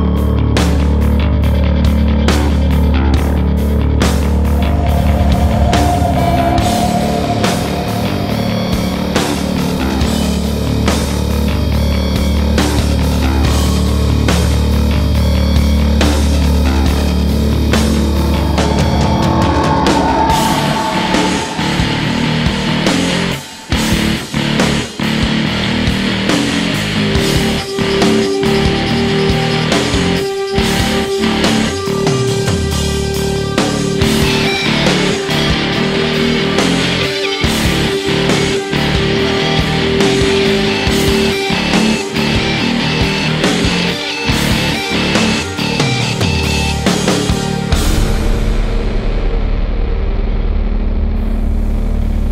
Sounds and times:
Soundtrack music: 0.0 - 50.1.

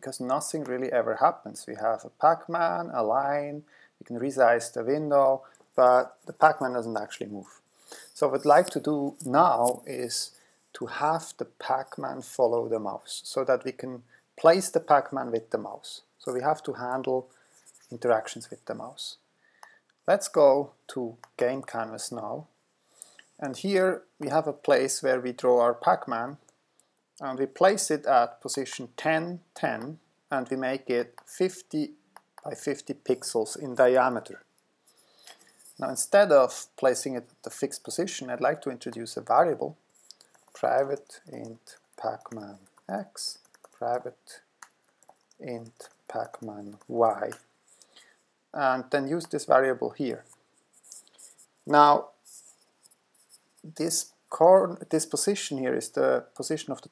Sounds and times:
Speech: 0.0 - 7.6, 8.2 - 17.3, 17.9 - 19.2, 20.1 - 22.5, 23.4 - 26.4, 27.2 - 34.5, 35.8 - 39.8, 40.6 - 44.5, 45.4 - 47.5, 48.6 - 50.4, 51.7 - 52.2, 53.6 - 56.9.

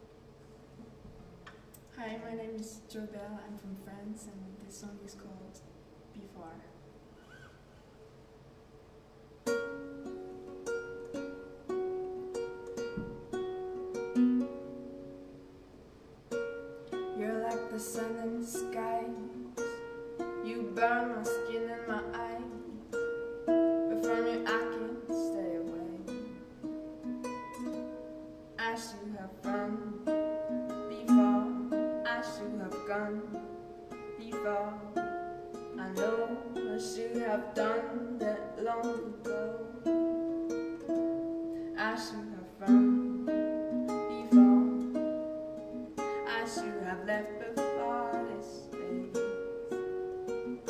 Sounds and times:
Music: 5.6 - 50.7.

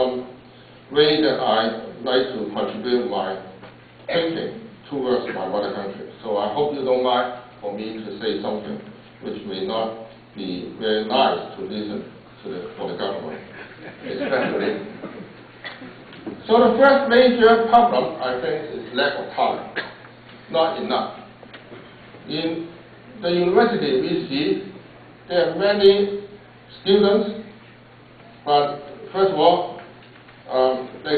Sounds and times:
Male speech, man speaking: 0.0 - 0.3, 1.0 - 13.5, 14.1 - 14.9, 16.4 - 19.8, 20.5 - 21.3, 22.3 - 27.6, 28.5 - 29.8, 30.5 - 31.1
Narration, monologue: 0.0 - 31.1.

